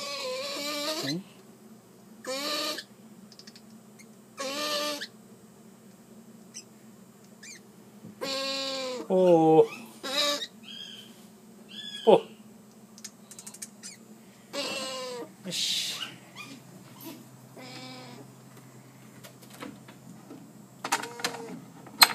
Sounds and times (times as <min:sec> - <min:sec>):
Owl: 0:00.0 - 0:01.3, 0:02.2 - 0:05.2, 0:06.5 - 0:06.7, 0:07.4 - 0:07.6, 0:08.2 - 0:12.4, 0:13.4 - 0:18.3, 0:21.1 - 0:21.6.